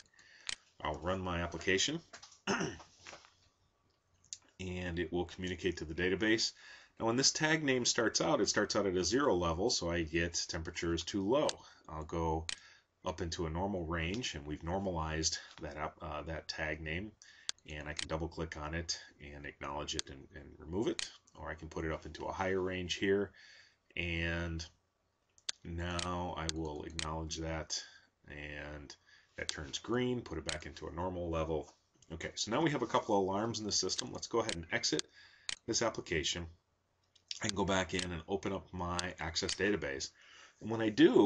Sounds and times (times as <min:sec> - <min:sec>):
Speech: 0:00.8 - 0:02.8, 0:04.4 - 0:23.4, 0:24.0 - 0:24.8, 0:25.5 - 0:36.6, 0:37.3 - 0:41.2.